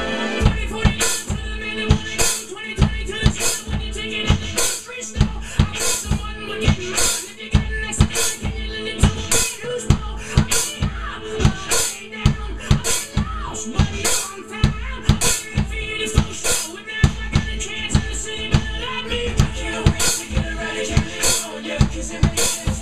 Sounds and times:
Drum: 0:00.0 - 0:22.8
Drum kit: 0:00.0 - 0:22.8.

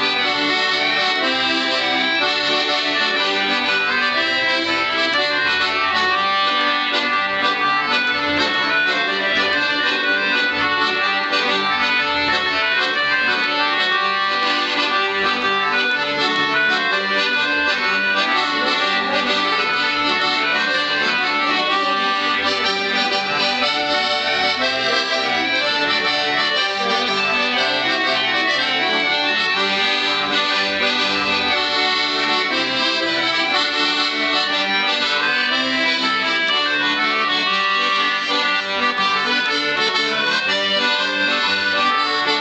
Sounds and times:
Accordion: 0:00.0 - 0:42.4.

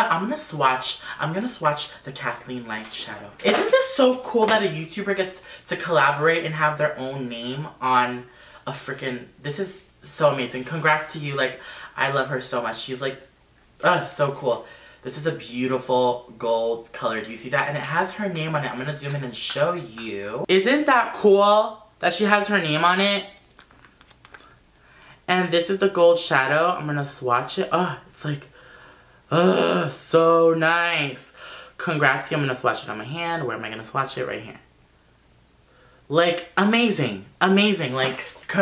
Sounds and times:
Speech: 0:00.0 - 0:23.4, 0:25.3 - 0:28.5, 0:29.3 - 0:34.7, 0:36.1 - 0:38.6.

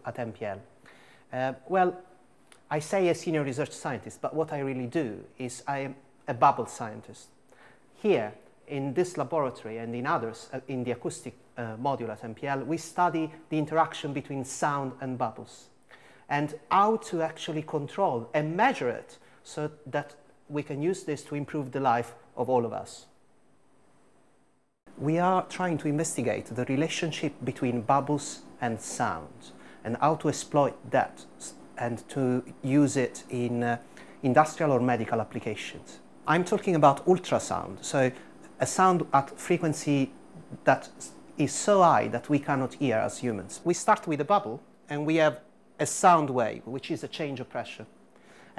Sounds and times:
Speech: 0:00.0 - 0:00.7, 0:01.3 - 0:07.4, 0:08.0 - 0:23.2, 0:24.9 - 0:47.9.

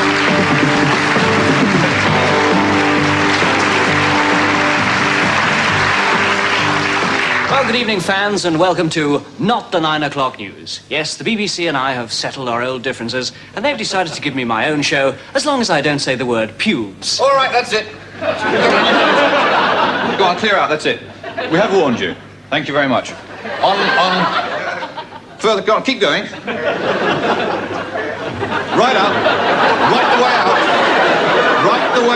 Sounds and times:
Speech: 0:07.5 - 0:18.0, 0:20.1 - 0:24.4, 0:25.4 - 0:26.4, 0:28.8 - 0:29.2, 0:29.8 - 0:30.6, 0:31.6 - 0:32.1.

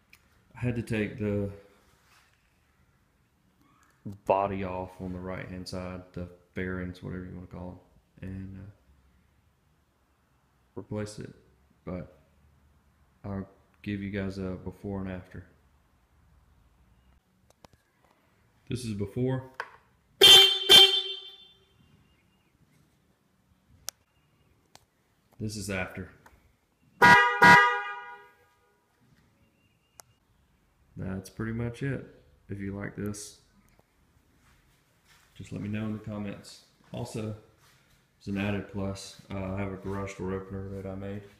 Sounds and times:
Speech: 0:00.6 - 0:01.7, 0:04.0 - 0:08.8, 0:10.8 - 0:12.2, 0:13.2 - 0:15.6, 0:18.7 - 0:19.6, 0:25.4 - 0:26.2, 0:31.0 - 0:33.4, 0:35.4 - 0:37.5, 0:38.2 - 0:41.3
Vehicle horn, car horn, honking: 0:20.2 - 0:21.9, 0:27.0 - 0:28.8.

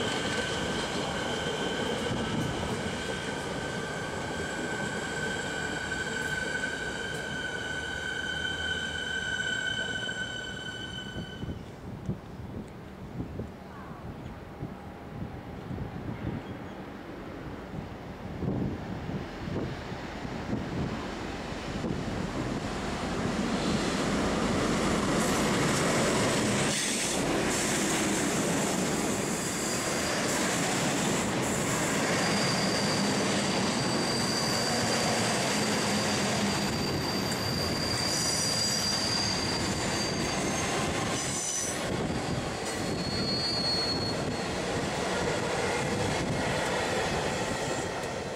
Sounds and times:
Railroad car, train wagon: 0:00.0 - 0:48.3
Train: 0:00.0 - 0:48.3.

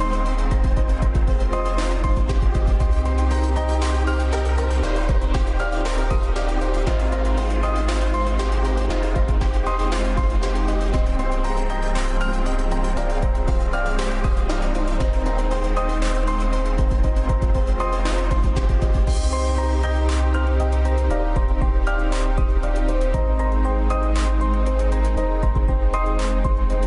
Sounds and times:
Music: 0:00.0 - 0:26.8.

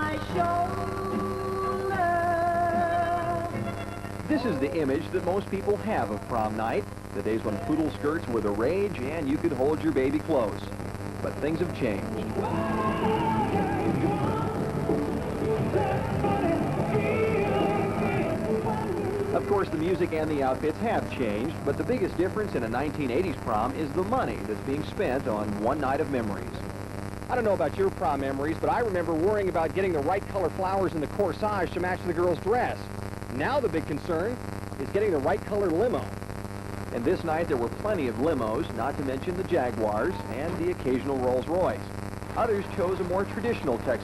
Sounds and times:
Music: 0:00.0 - 0:04.8, 0:12.0 - 0:22.2
Speech: 0:04.3 - 0:12.2, 0:19.4 - 0:26.6, 0:27.3 - 0:36.1, 0:36.9 - 0:44.0.

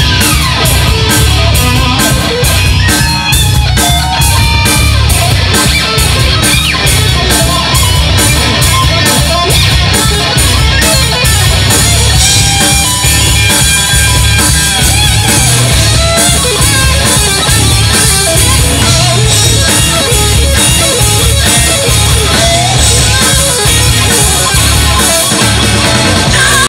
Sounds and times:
Musical instrument: 0:00.0 - 0:26.6.

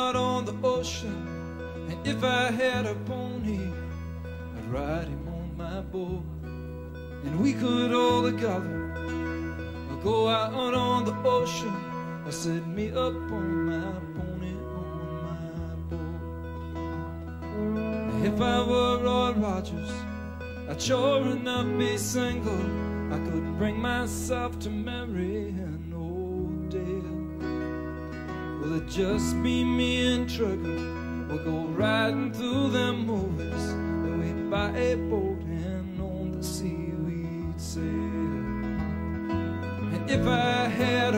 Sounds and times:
Music: 0:00.0 - 0:41.1.

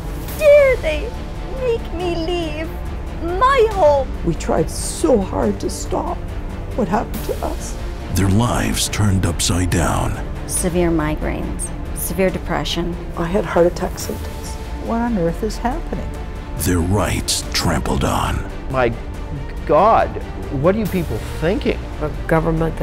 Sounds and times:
Music: 0:00.0 - 0:22.8
Speech: 0:08.1 - 0:10.2, 0:16.6 - 0:18.9.

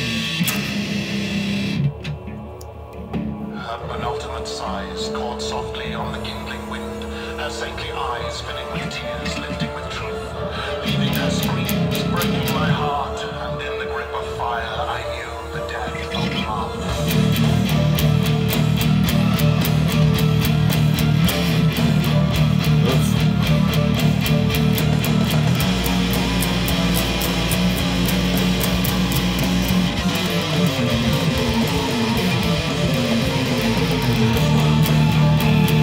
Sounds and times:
Speech: 0:03.5 - 0:17.1, 0:22.8 - 0:23.6
Strum: 0:16.2 - 0:35.8.

